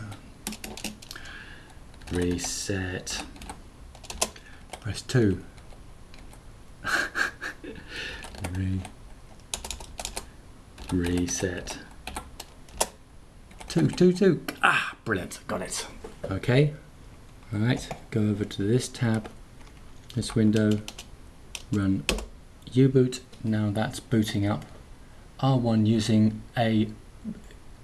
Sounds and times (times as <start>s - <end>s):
Typing: 0.0s - 4.9s, 8.2s - 14.0s, 20.3s - 22.3s
Speech: 2.1s - 3.3s, 4.8s - 5.5s, 8.4s - 8.9s, 10.9s - 11.9s, 13.7s - 16.8s, 17.5s - 19.3s, 20.1s - 20.9s, 21.7s - 22.1s, 22.7s - 24.7s, 25.4s - 27.4s.